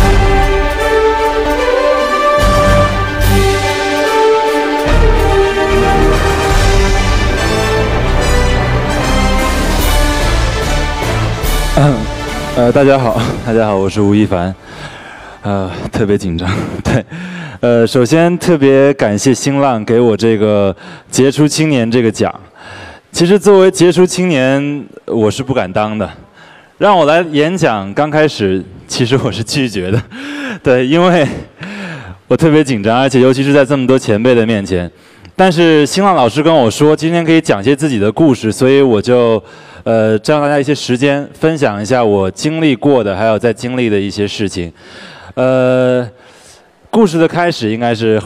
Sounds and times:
Narration, monologue: 0:00.0 - 0:48.2
Male speech, man speaking: 0:11.8 - 0:14.6, 0:15.4 - 0:22.5, 0:23.2 - 0:30.0, 0:30.6 - 0:31.5, 0:32.3 - 0:44.8, 0:45.4 - 0:46.2, 0:46.9 - 0:48.2.

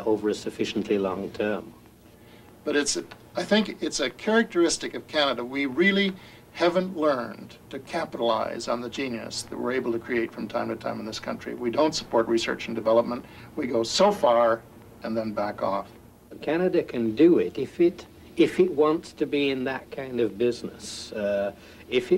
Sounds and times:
Speech: 0:00.0 - 0:01.8, 0:02.6 - 0:22.1.

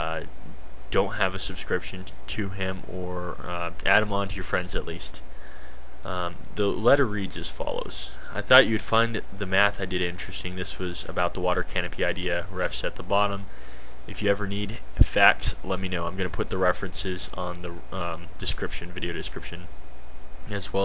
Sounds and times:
Speech: 0:00.0 - 0:05.3, 0:06.0 - 0:13.5, 0:14.1 - 0:19.7, 0:20.4 - 0:20.8.

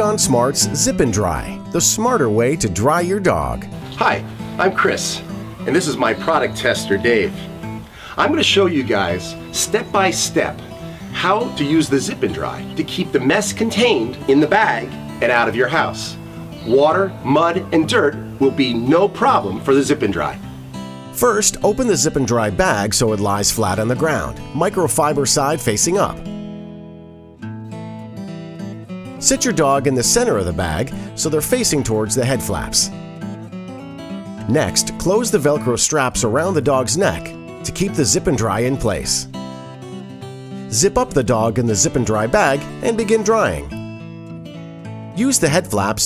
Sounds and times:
Speech: 0:00.0 - 0:07.5, 0:08.2 - 0:20.4, 0:21.2 - 0:26.2, 0:29.2 - 0:33.0, 0:34.4 - 0:39.3, 0:40.7 - 0:43.8, 0:45.2 - 0:46.0
Music: 0:00.0 - 0:46.0.

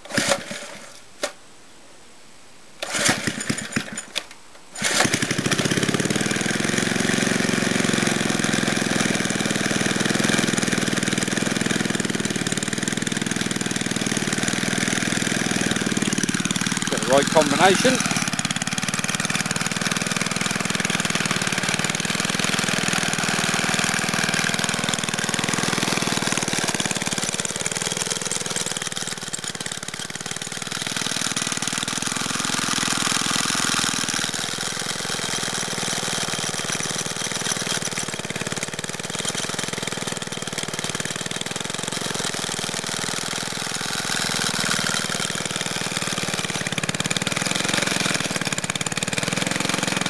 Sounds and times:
Lawn mower: 0:00.0 - 0:01.4, 0:02.8 - 0:50.1.

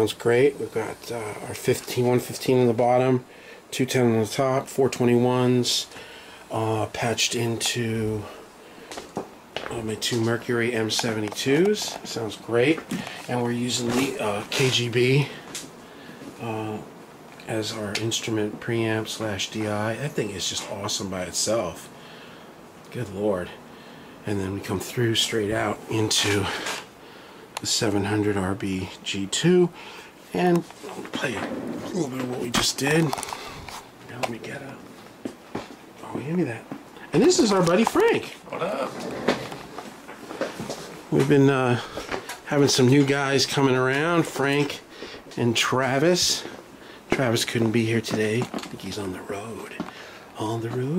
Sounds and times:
Speech: 0:00.0 - 0:05.9, 0:06.5 - 0:08.4, 0:09.6 - 0:15.4, 0:16.4 - 0:21.9, 0:22.9 - 0:23.6, 0:24.2 - 0:26.8, 0:27.6 - 0:33.2, 0:34.1 - 0:34.9, 0:36.0 - 0:39.2, 0:41.1 - 0:41.9, 0:42.5 - 0:50.9.

